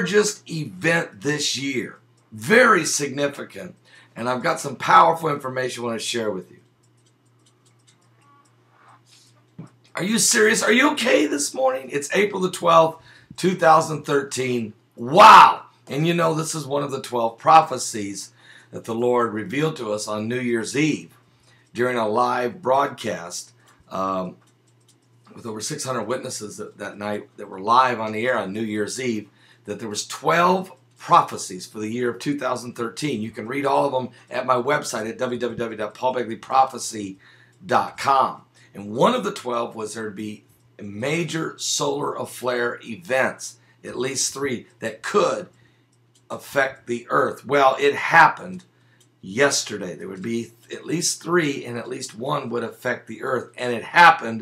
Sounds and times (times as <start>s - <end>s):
Speech: 0.0s - 6.6s, 9.9s - 21.2s, 21.8s - 24.4s, 25.3s - 45.5s, 46.3s - 54.4s.